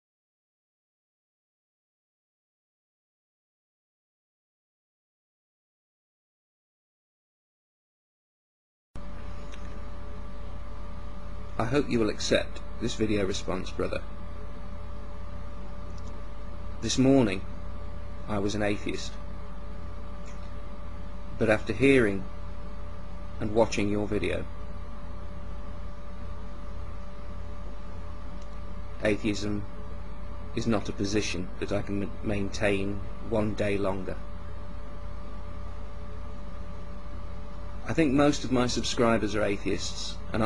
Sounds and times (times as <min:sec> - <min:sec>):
Speech: 0:11.6 - 0:14.1, 0:16.8 - 0:17.5, 0:18.3 - 0:19.2, 0:21.4 - 0:22.3, 0:23.4 - 0:24.5, 0:29.0 - 0:29.7, 0:30.5 - 0:34.2, 0:37.8 - 0:40.4.